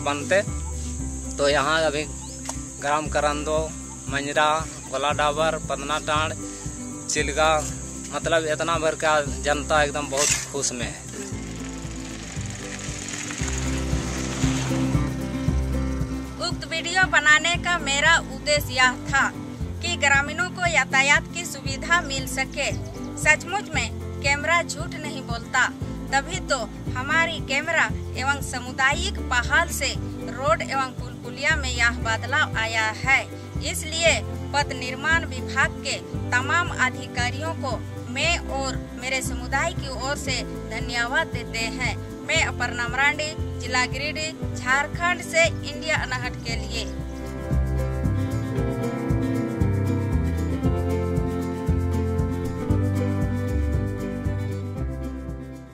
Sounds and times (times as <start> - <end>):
Music: 0.0 - 55.7.